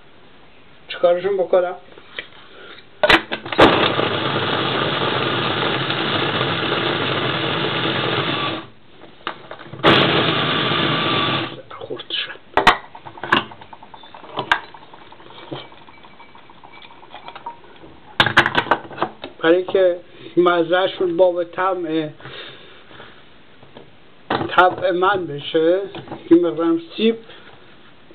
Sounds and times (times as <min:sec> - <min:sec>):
Blender: 0:03.6 - 0:08.7, 0:09.8 - 0:11.6.